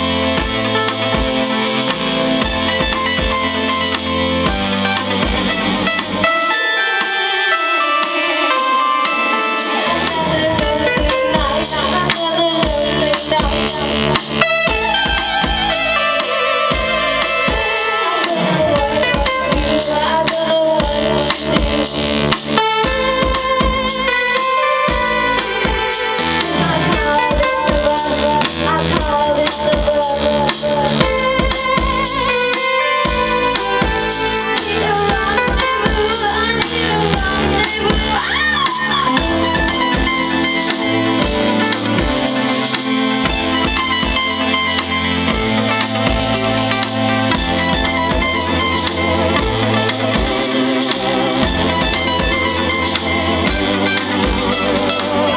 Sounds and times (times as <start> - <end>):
Music: 0.0 - 55.3.